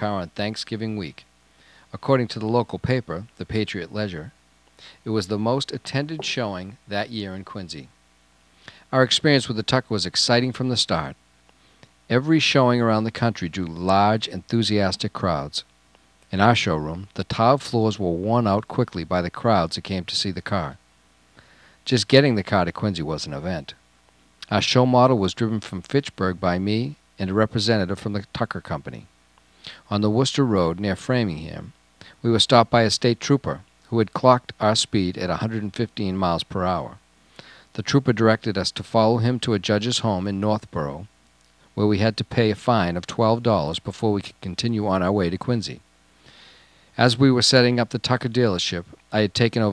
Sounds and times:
Speech: 0.0s - 1.3s, 1.9s - 4.4s, 5.0s - 7.9s, 8.9s - 11.2s, 12.1s - 15.7s, 16.3s - 20.8s, 21.8s - 23.8s, 24.4s - 29.1s, 29.8s - 37.0s, 37.8s - 41.1s, 41.8s - 45.8s, 47.0s - 49.7s.

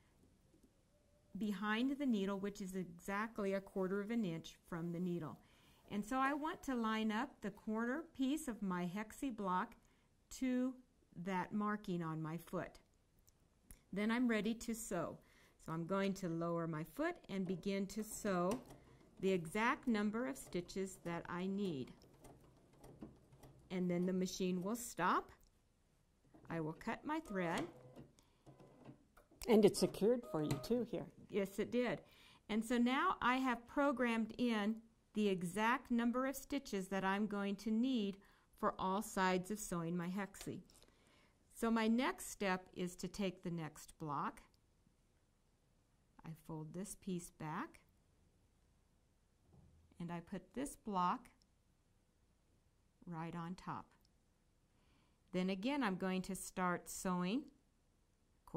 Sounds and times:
Speech: 1.4s - 12.8s, 13.9s - 18.6s, 19.2s - 21.9s, 23.7s - 25.3s, 26.5s - 27.7s, 29.4s - 40.7s, 41.6s - 44.4s, 46.2s - 47.8s, 50.0s - 51.4s, 53.1s - 54.0s, 55.4s - 57.6s.

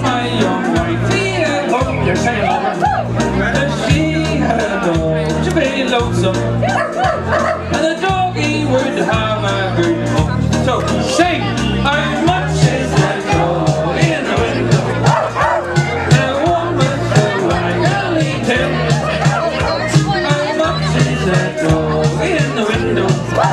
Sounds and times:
Speech: 0.0s - 6.8s, 7.7s - 23.5s
Music: 0.0s - 23.5s.

